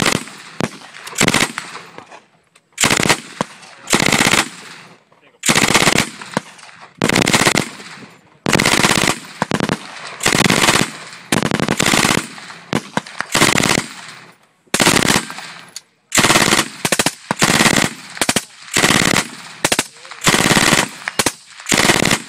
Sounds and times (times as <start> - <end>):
Machine gun: 0.0 - 1.9, 2.8 - 22.2.